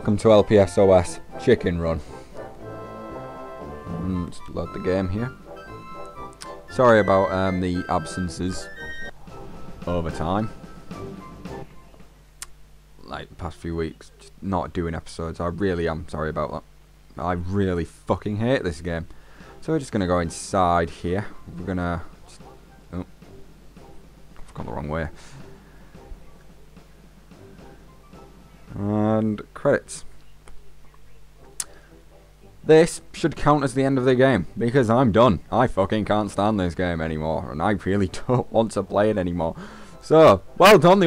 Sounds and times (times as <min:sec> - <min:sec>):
Speech: 0:00.0 - 0:02.0, 0:03.9 - 0:05.4, 0:06.7 - 0:08.7, 0:09.9 - 0:10.5, 0:13.0 - 0:23.1, 0:24.5 - 0:25.4, 0:28.7 - 0:31.3, 0:32.7 - 0:41.0
Music: 0:00.0 - 0:12.4, 0:18.6 - 0:41.0.